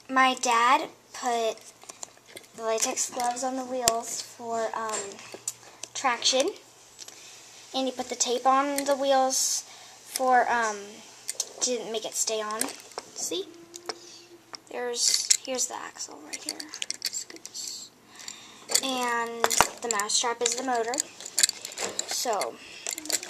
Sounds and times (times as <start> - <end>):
Speech: 0.1 - 1.6, 2.6 - 5.2, 6.0 - 6.6, 7.7 - 11.0, 11.6 - 13.6, 14.7 - 16.8, 18.8 - 21.1, 22.1 - 23.2.